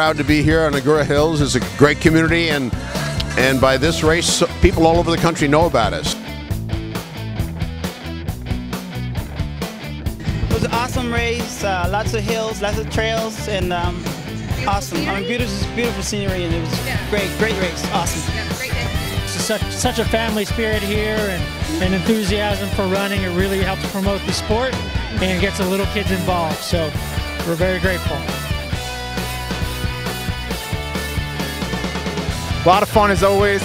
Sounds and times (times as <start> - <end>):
Speech: 0.0 - 6.2, 10.5 - 28.3, 32.6 - 33.6
Music: 0.0 - 33.6.